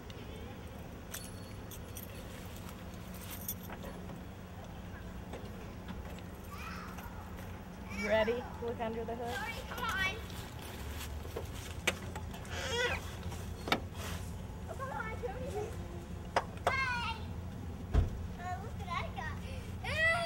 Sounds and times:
Outside, rural or natural: 0:00.0 - 0:20.2.

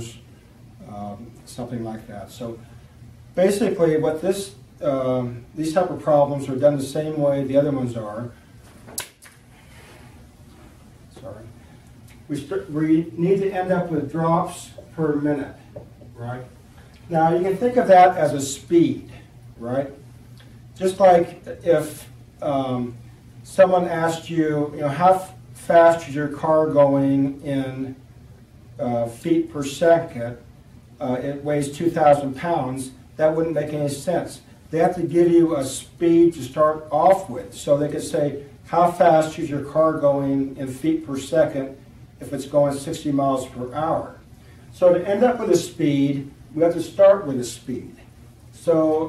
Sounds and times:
Speech: 0:00.0 - 0:00.2, 0:00.8 - 0:02.6, 0:03.4 - 0:08.4, 0:11.1 - 0:11.6, 0:12.3 - 0:20.0, 0:20.8 - 0:28.0, 0:28.8 - 0:44.2, 0:44.8 - 0:49.0.

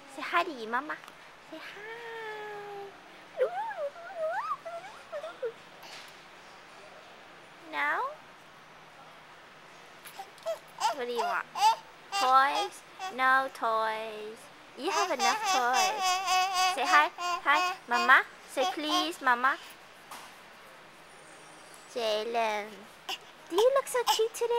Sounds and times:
Speech: 0:06.7 - 0:08.2, 0:10.8 - 0:11.5, 0:12.2 - 0:19.7, 0:23.5 - 0:24.5.

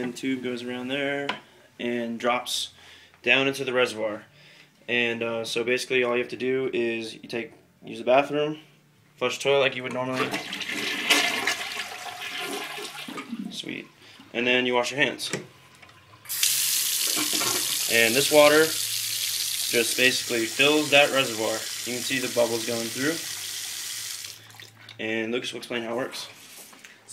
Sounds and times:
Speech: 0:00.0 - 0:04.3, 0:04.9 - 0:10.4, 0:13.5 - 0:15.5, 0:17.9 - 0:18.8, 0:19.7 - 0:23.3, 0:25.0 - 0:26.4
Toilet flush: 0:10.2 - 0:13.7, 0:16.0 - 0:24.8.

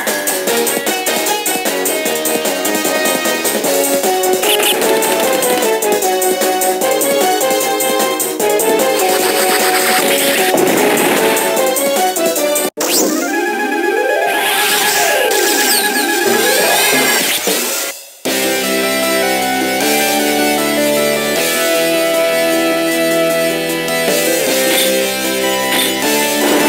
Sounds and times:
Music: 0:00.0 - 0:26.6.

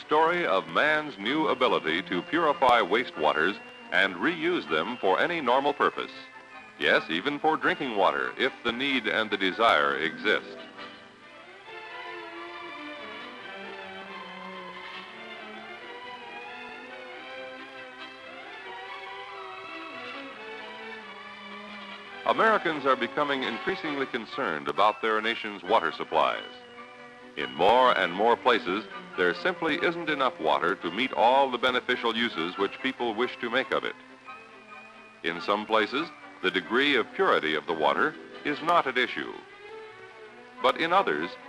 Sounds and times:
Speech: 0:00.0 - 0:06.2, 0:06.8 - 0:10.6, 0:22.3 - 0:26.6, 0:27.4 - 0:34.0, 0:35.3 - 0:39.4, 0:40.6 - 0:41.4
Music: 0:00.0 - 0:41.4.

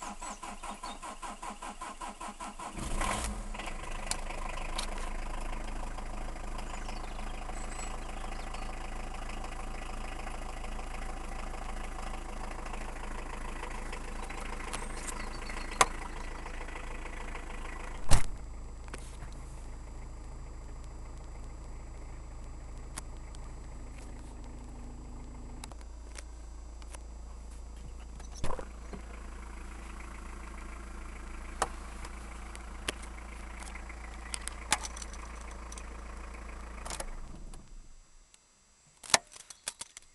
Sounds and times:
Car: 0:00.0 - 0:40.1
Medium engine (mid frequency): 0:00.0 - 0:40.1.

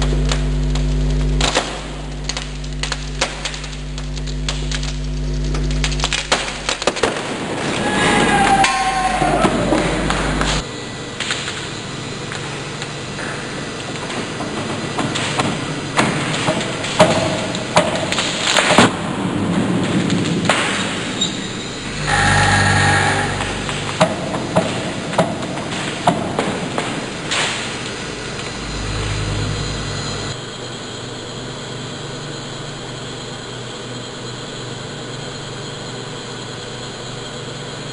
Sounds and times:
Inside, large room or hall: 0:00.0 - 0:37.9.

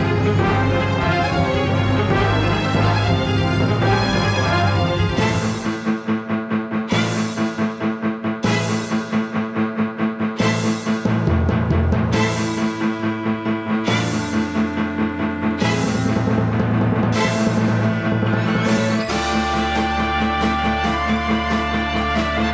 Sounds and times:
Music: 0:00.0 - 0:22.5.

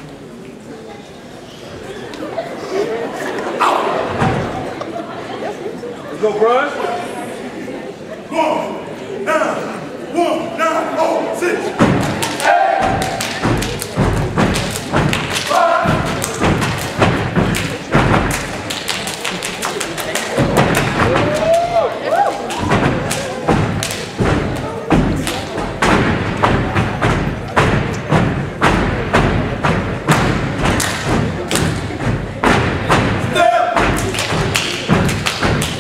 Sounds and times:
Thump, thud: 0:11.8 - 0:12.2, 0:22.6 - 0:25.2, 0:25.8 - 0:35.7.

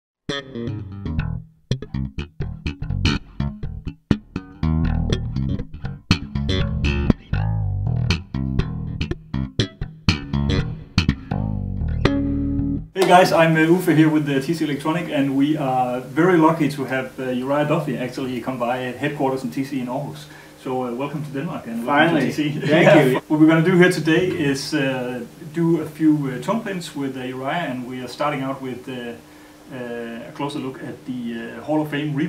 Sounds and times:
Bass guitar: 0:00.3 - 0:13.0.

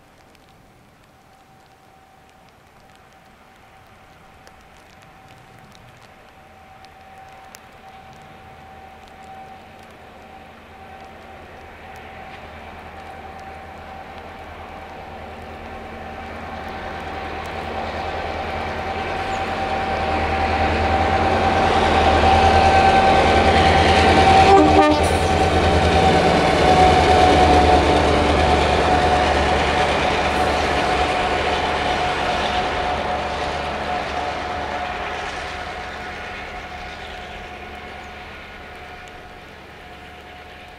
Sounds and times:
Train horn: 0:15.8 - 0:40.7.

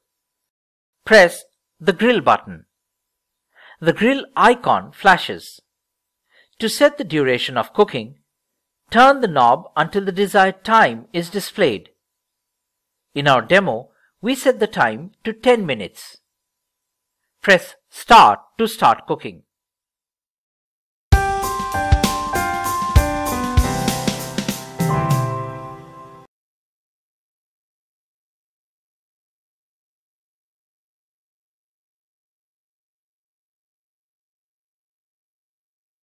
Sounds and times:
Speech: 0:01.0 - 0:02.7, 0:03.8 - 0:05.7, 0:06.6 - 0:08.2, 0:08.9 - 0:12.0, 0:13.2 - 0:16.3, 0:17.4 - 0:19.5
Music: 0:21.1 - 0:26.3.

